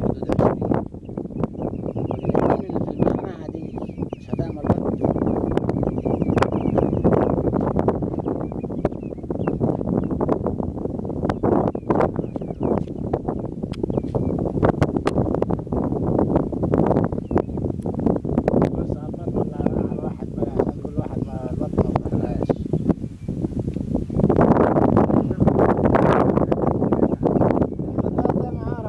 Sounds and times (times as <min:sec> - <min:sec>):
Speech: 0:00.0 - 0:00.8, 0:02.4 - 0:04.9, 0:18.7 - 0:22.7, 0:28.0 - 0:28.8.